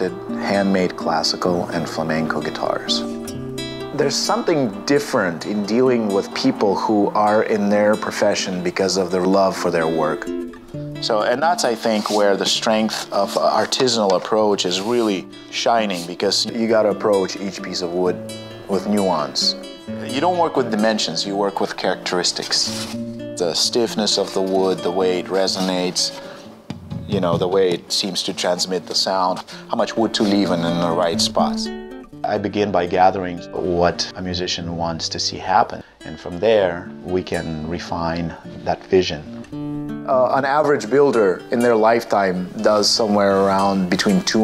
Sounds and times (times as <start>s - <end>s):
Speech: 0.0s - 3.1s, 4.0s - 10.3s, 11.0s - 26.2s, 27.1s - 39.3s, 40.1s - 44.4s
Music: 0.0s - 44.4s.